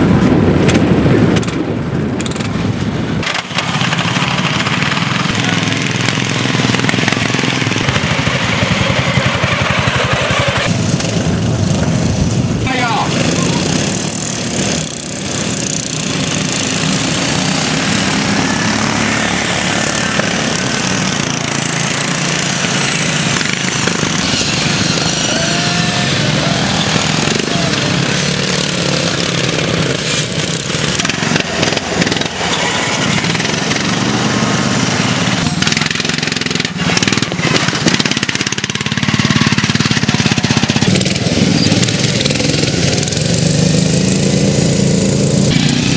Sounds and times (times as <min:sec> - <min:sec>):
Vehicle: 0:00.0 - 0:45.9
Lawn mower: 0:03.2 - 0:45.9
Speech: 0:12.6 - 0:13.8.